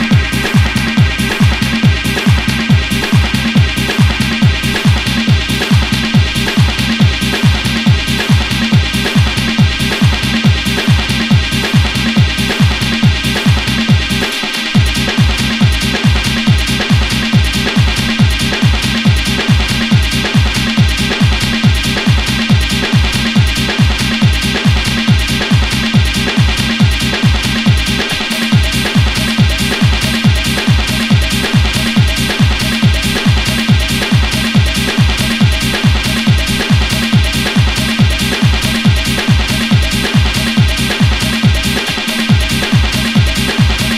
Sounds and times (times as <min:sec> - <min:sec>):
Techno: 0:00.0 - 0:43.9.